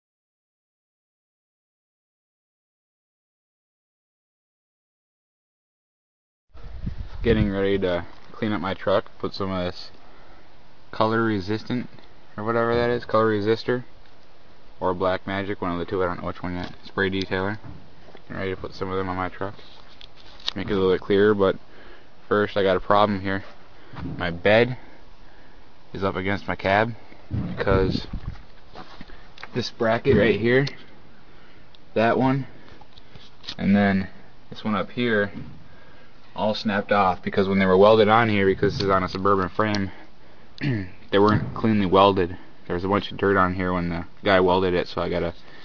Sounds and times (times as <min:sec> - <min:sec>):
Speech: 0:07.2 - 0:10.0, 0:10.9 - 0:13.9, 0:14.8 - 0:17.7, 0:18.3 - 0:19.7, 0:20.5 - 0:21.6, 0:22.3 - 0:24.9, 0:25.9 - 0:28.2, 0:29.5 - 0:30.8, 0:31.9 - 0:32.6, 0:33.5 - 0:35.5, 0:36.4 - 0:40.0, 0:40.6 - 0:45.4.